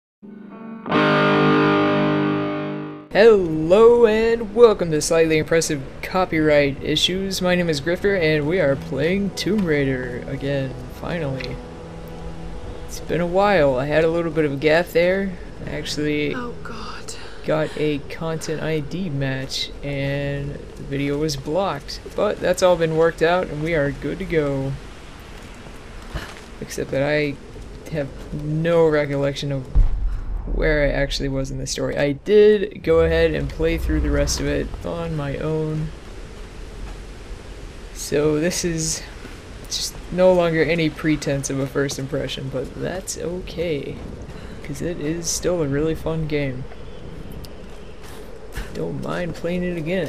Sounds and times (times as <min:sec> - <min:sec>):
Distortion: 0:00.2 - 0:26.1, 0:26.7 - 0:41.4.